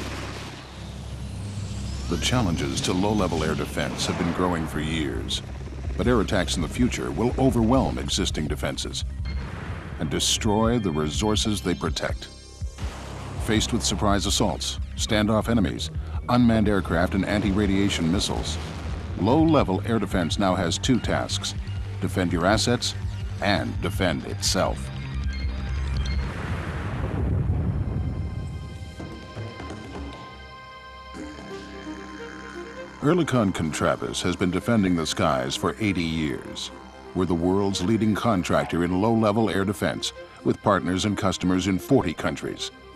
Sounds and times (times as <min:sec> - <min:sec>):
Music: 0:00.0 - 0:42.9
Speech: 0:02.1 - 0:05.4, 0:06.0 - 0:09.0, 0:10.0 - 0:12.3, 0:13.4 - 0:18.6, 0:19.2 - 0:24.9, 0:33.0 - 0:42.7.